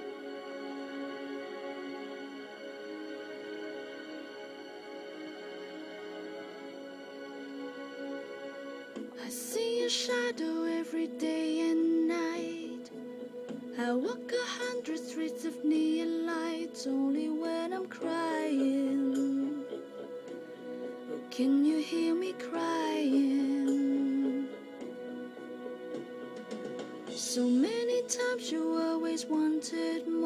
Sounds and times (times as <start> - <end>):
Music: 0.0 - 30.2
Female singing: 9.2 - 12.9, 13.8 - 19.7, 21.3 - 24.6, 27.1 - 30.2.